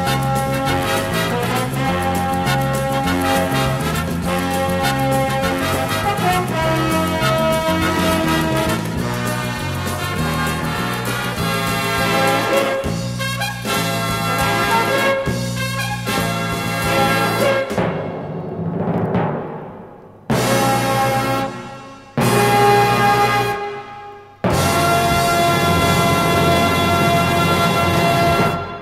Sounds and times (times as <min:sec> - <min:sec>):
Orchestra: 0:00.0 - 0:28.8
Timpani: 0:00.0 - 0:28.8.